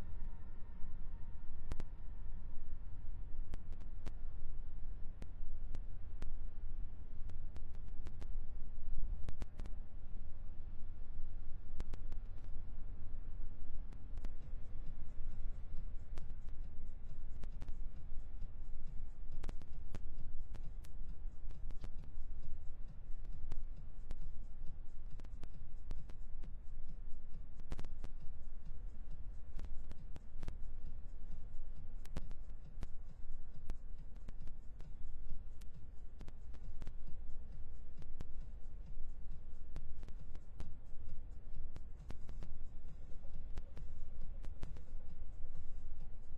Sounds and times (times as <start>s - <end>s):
Silence: 0.0s - 46.3s.